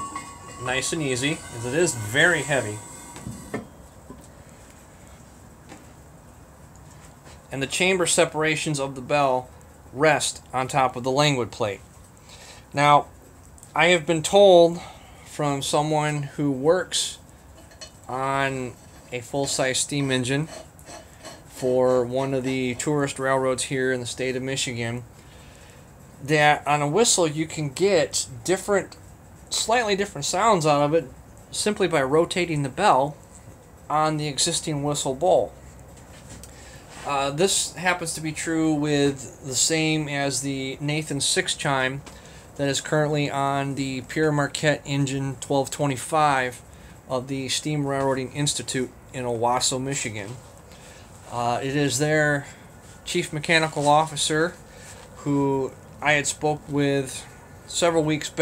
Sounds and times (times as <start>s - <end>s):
Speech: 0.5s - 2.8s, 7.5s - 11.9s, 12.7s - 13.1s, 13.7s - 17.2s, 18.1s - 20.6s, 21.5s - 25.1s, 26.2s - 33.2s, 33.9s - 35.6s, 37.0s - 50.4s, 51.3s - 54.6s, 55.2s - 58.4s.